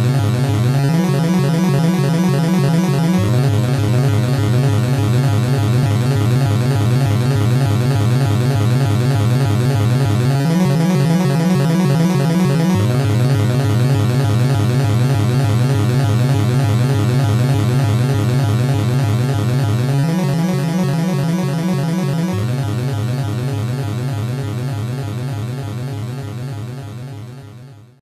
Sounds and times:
Video game music: 0:00.0 - 0:07.6, 0:09.4 - 0:25.9.

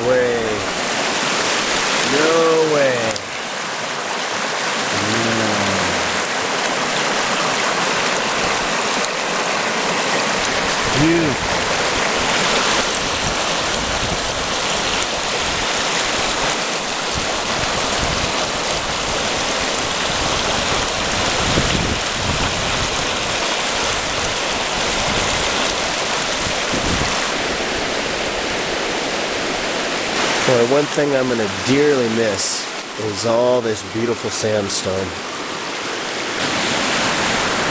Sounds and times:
Water: 0:00.0 - 0:37.7.

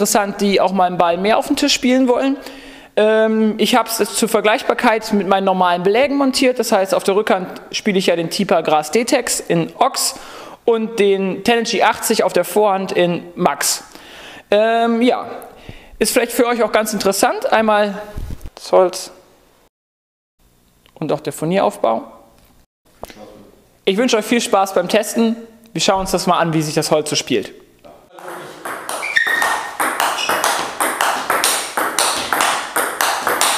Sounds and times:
Speech: 0:00.0 - 0:02.4, 0:03.0 - 0:13.9, 0:16.0 - 0:18.0, 0:18.6 - 0:19.2, 0:21.0 - 0:22.2, 0:23.1 - 0:28.6.

